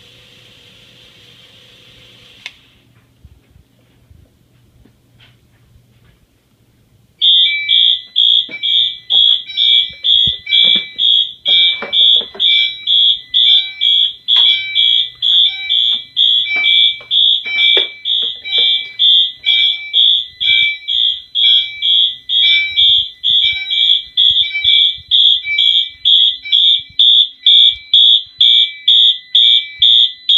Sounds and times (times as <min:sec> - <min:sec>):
Fire alarm: 0:07.2 - 0:30.3
Smoke detector, smoke alarm: 0:07.2 - 0:30.3.